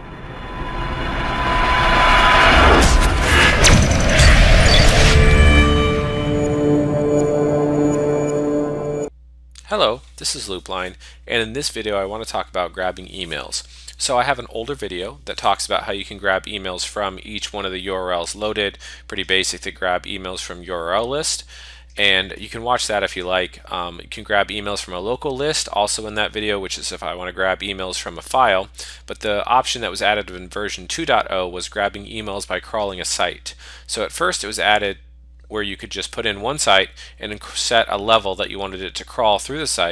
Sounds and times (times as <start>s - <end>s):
Speech: 9.6s - 39.9s.